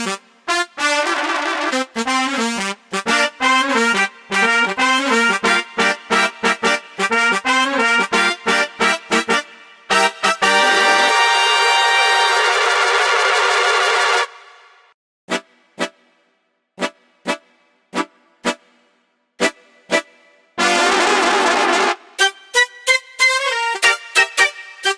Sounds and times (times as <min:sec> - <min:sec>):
Music: 0:00.0 - 0:24.9.